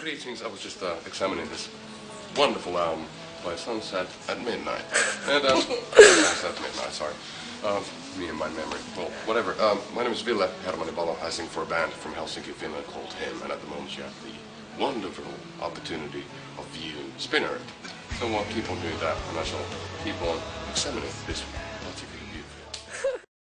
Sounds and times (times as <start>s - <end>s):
Speech: 0.0s - 1.7s, 2.4s - 17.6s, 18.2s - 22.5s
Music: 0.0s - 23.3s.